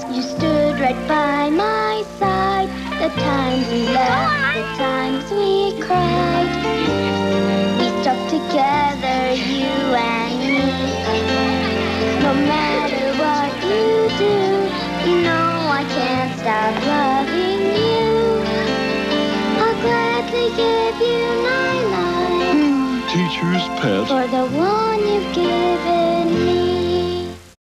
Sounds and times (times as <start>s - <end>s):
Music: 0.0s - 27.6s
Speech: 4.1s - 4.8s, 23.1s - 24.1s.